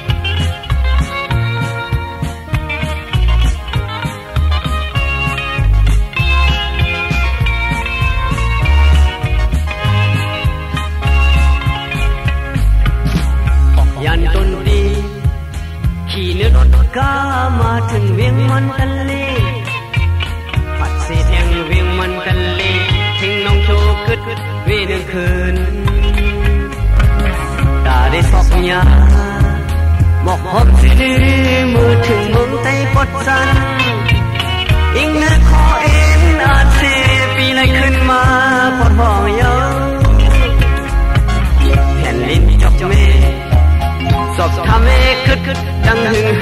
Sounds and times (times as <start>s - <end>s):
Music: 0.0s - 46.4s.